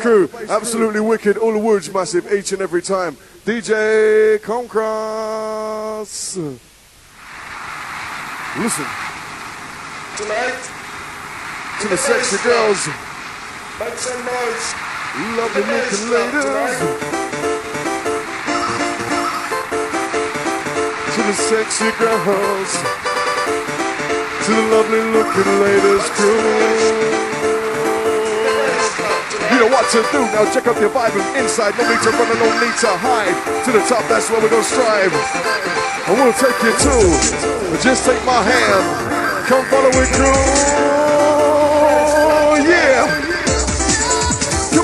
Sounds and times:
Speech: 0.0s - 6.6s, 8.6s - 8.9s, 10.2s - 10.7s, 11.8s - 13.0s, 13.8s - 17.0s, 21.1s - 22.8s, 24.4s - 27.2s, 28.1s - 35.2s, 36.1s - 43.2s
Techno: 7.3s - 44.8s.

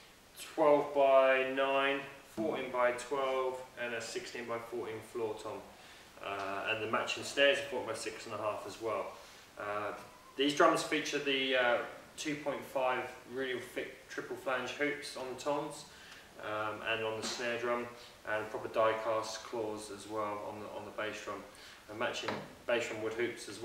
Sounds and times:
Speech: 0.4s - 23.6s.

